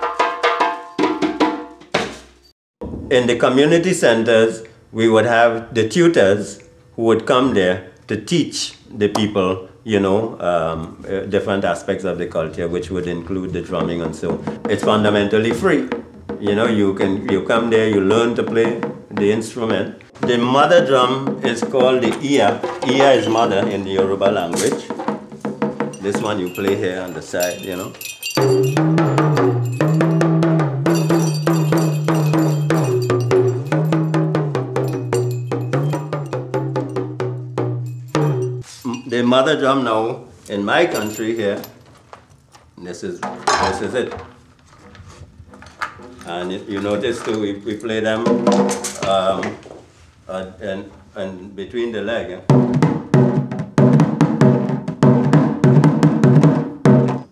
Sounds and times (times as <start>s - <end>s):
Speech: 3.1s - 25.0s, 26.0s - 28.0s, 38.8s - 41.7s, 42.8s - 44.3s, 46.2s - 49.6s, 50.3s - 52.5s
Wood block: 13.7s - 17.7s, 20.2s - 39.0s.